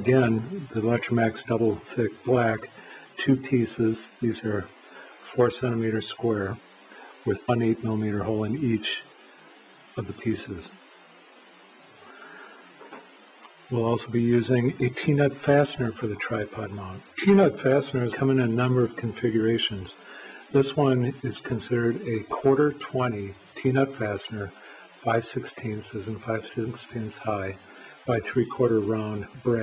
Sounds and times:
Speech: 0.0 - 9.1, 9.9 - 10.8, 13.7 - 29.6.

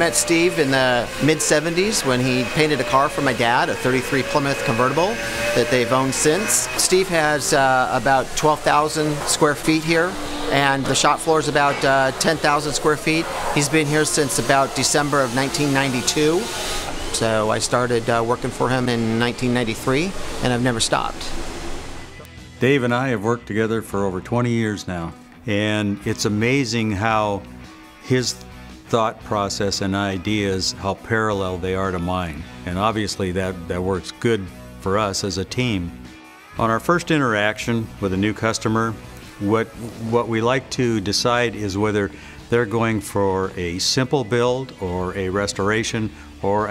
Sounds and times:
Speech: 0.0 - 16.5, 17.1 - 21.3, 22.6 - 27.4, 28.1 - 36.0, 36.6 - 46.7.

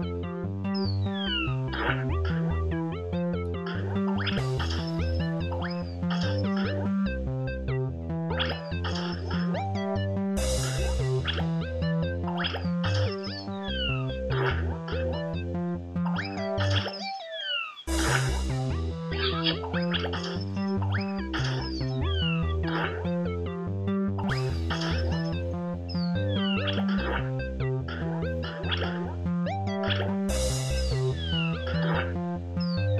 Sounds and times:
Music: 0.0 - 32.9.

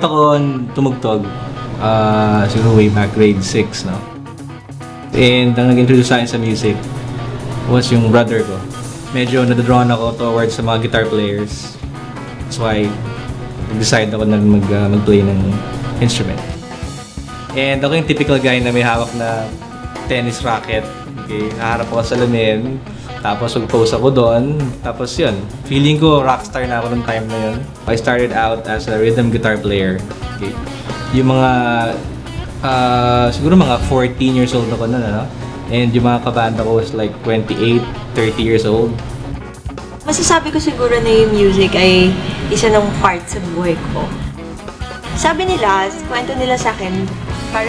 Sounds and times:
Speech: 0.0 - 4.1, 5.2 - 6.8, 7.7 - 8.6, 9.2 - 11.8, 12.5 - 13.0, 13.7 - 16.5, 17.5 - 19.5, 20.1 - 32.0, 32.6 - 39.0, 40.1 - 44.1
Music: 0.0 - 47.6.

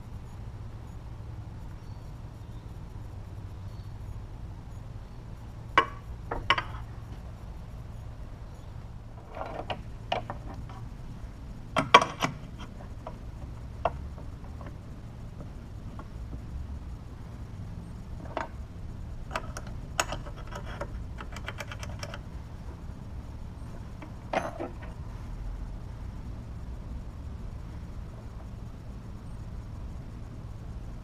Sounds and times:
Tools: 9.2 - 10.8, 11.8 - 13.2, 19.3 - 22.2, 24.0 - 25.0.

